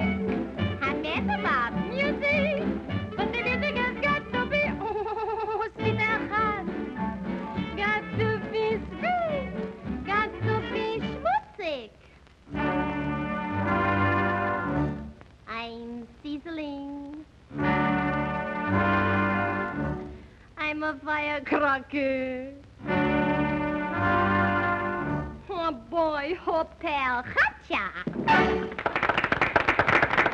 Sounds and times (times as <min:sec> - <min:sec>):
Music: 0:00.0 - 0:11.4, 0:12.4 - 0:15.6, 0:17.5 - 0:20.4, 0:22.5 - 0:25.6, 0:28.1 - 0:29.3.